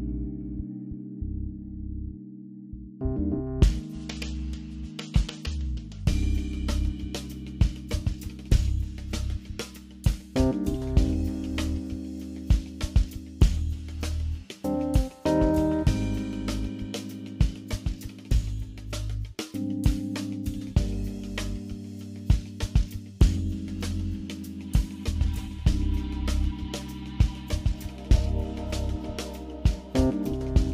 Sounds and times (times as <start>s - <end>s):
Music: 0.0s - 30.7s.